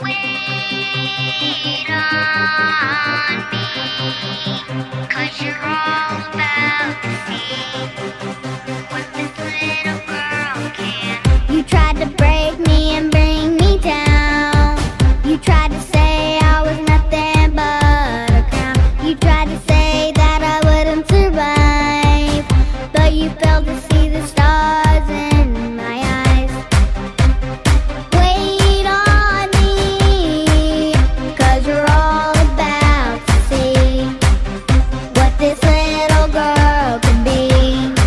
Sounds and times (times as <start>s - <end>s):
Music: 0.0s - 38.0s.